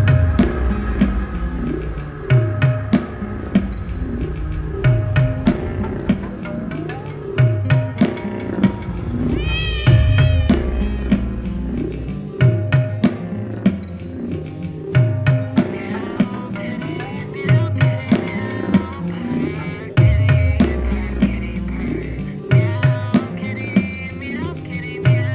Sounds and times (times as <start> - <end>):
Music: 0.0 - 25.3
Meow: 9.4 - 11.0.